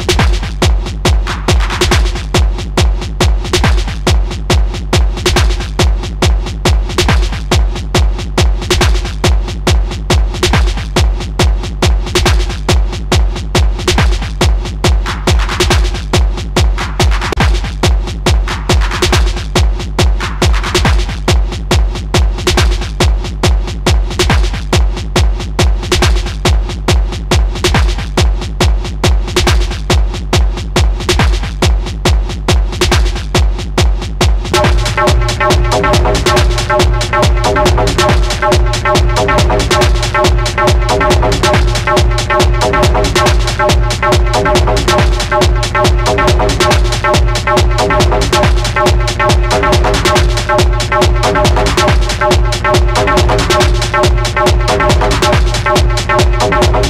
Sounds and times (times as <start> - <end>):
Techno: 0.0 - 56.8.